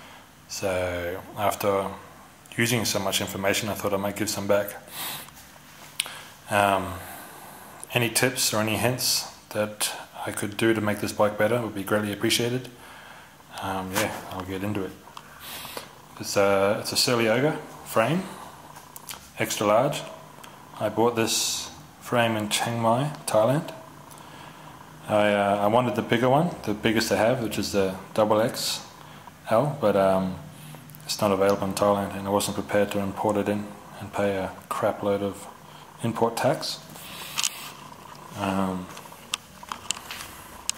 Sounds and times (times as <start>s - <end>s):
Speech: 0.5s - 4.9s, 6.5s - 7.2s, 7.8s - 12.8s, 13.5s - 15.0s, 16.2s - 20.2s, 20.8s - 23.9s, 25.0s - 36.9s, 38.3s - 39.0s.